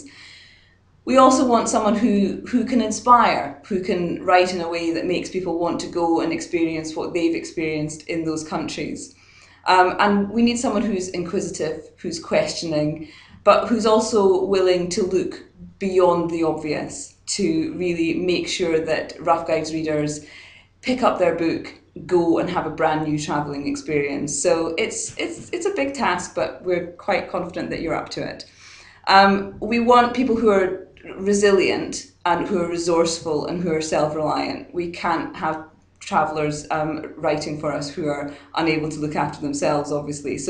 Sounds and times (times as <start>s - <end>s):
Speech: 0.0s - 0.3s, 1.1s - 9.1s, 9.7s - 28.5s, 29.1s - 40.5s.